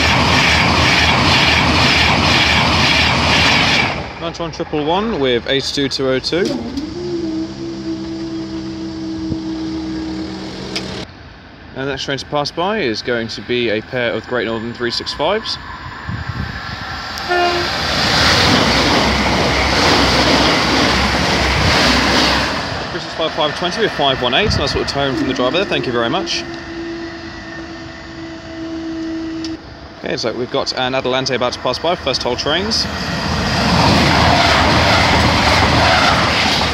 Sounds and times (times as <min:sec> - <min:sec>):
Railroad car, train wagon: 0:00.0 - 0:36.7
Train horn: 0:06.3 - 0:11.1, 0:17.2 - 0:17.9, 0:24.3 - 0:30.0.